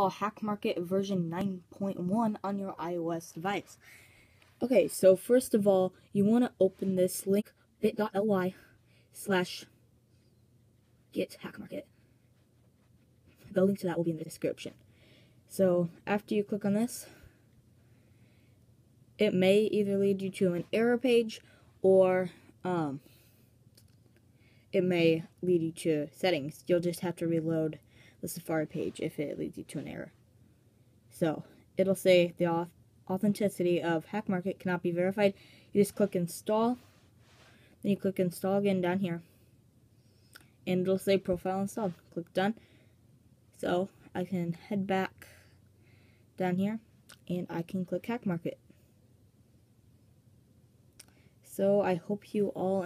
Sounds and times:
Speech: 0.0 - 3.8, 4.6 - 9.7, 11.1 - 11.9, 13.4 - 14.8, 15.5 - 17.2, 19.2 - 23.1, 24.8 - 30.2, 31.1 - 36.9, 37.8 - 39.3, 40.7 - 42.6, 43.6 - 45.4, 46.4 - 48.6, 51.5 - 52.8.

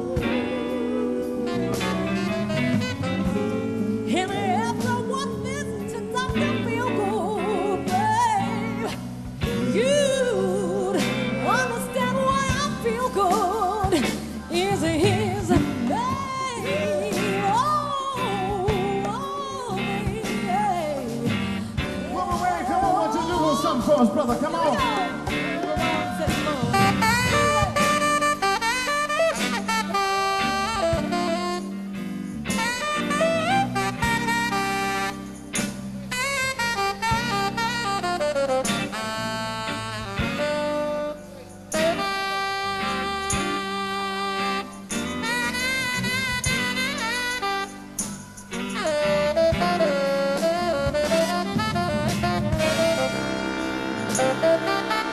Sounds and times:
Brass instrument: 0.0 - 55.1
Saxophone: 0.0 - 55.1.

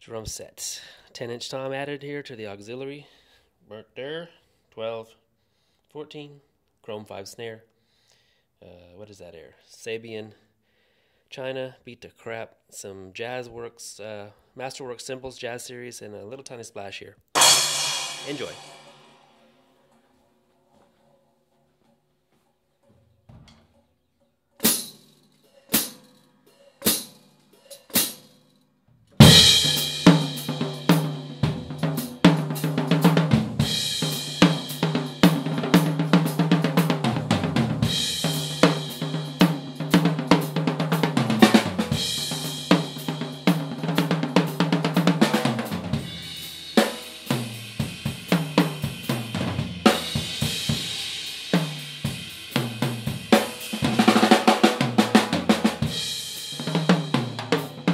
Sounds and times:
Inside, small room: 0.0 - 57.9
Snare drum: 17.4 - 19.4, 29.2 - 57.9
Drum kit: 17.4 - 19.6, 24.6 - 28.3, 29.2 - 57.9.

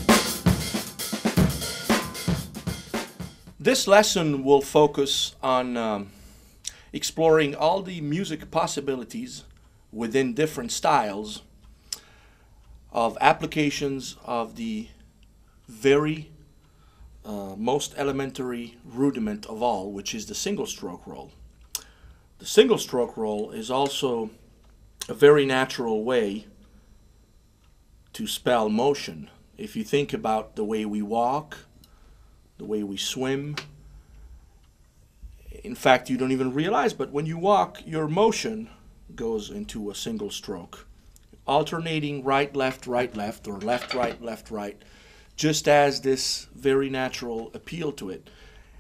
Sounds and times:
Speech: 3.6 - 6.2, 6.9 - 11.5, 12.9 - 15.0, 15.7 - 16.4, 17.2 - 21.4, 22.4 - 24.4, 25.0 - 26.5, 28.1 - 31.7, 32.6 - 33.7, 35.4 - 44.8, 45.4 - 48.3.

